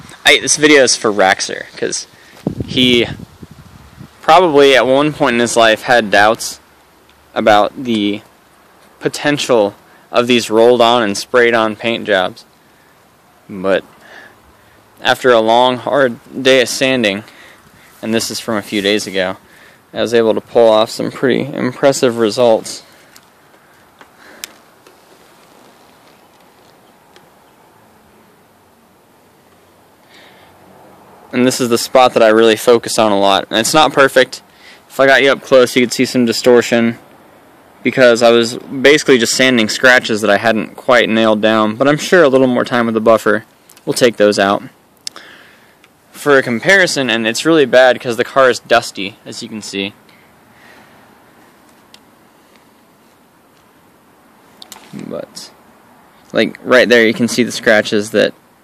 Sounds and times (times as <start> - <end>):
Speech: 0.2 - 2.1, 2.7 - 3.2, 4.2 - 6.6, 7.3 - 8.3, 9.0 - 12.5, 13.5 - 13.9, 15.0 - 17.3, 18.0 - 22.9, 31.3 - 37.0, 37.8 - 44.8, 46.1 - 50.0, 54.8 - 55.6, 56.3 - 58.4.